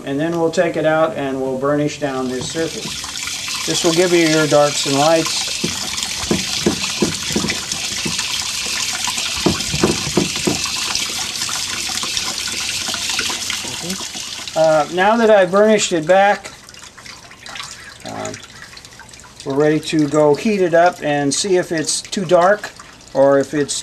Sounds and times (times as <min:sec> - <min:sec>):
Water: 0:00.1 - 0:23.8
Fill (with liquid): 0:02.0 - 0:23.8
Water tap, faucet: 0:02.1 - 0:23.8.